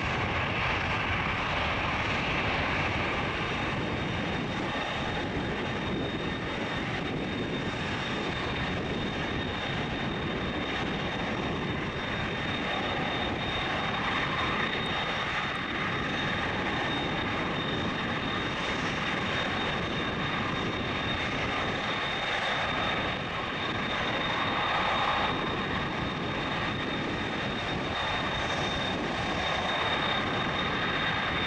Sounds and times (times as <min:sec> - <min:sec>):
Aircraft engine: 0:00.0 - 0:31.4
Fixed-wing aircraft, airplane: 0:00.0 - 0:31.4
Outside, urban or manmade: 0:00.0 - 0:31.4.